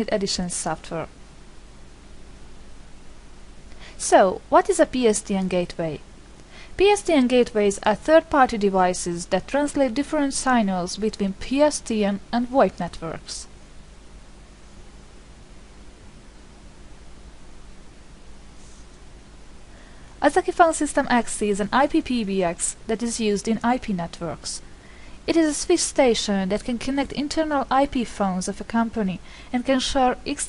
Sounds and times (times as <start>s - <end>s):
Speech: 0.0s - 1.1s, 4.0s - 6.0s, 6.8s - 13.5s, 20.2s - 24.6s, 25.3s - 30.4s.